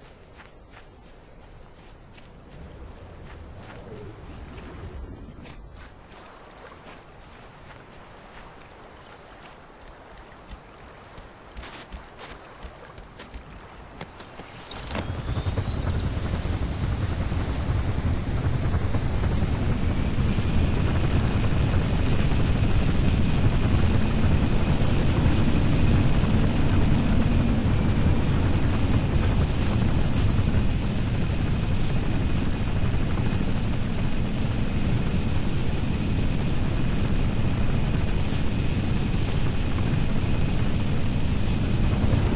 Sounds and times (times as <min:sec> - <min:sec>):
Vehicle: 0:14.0 - 0:42.3.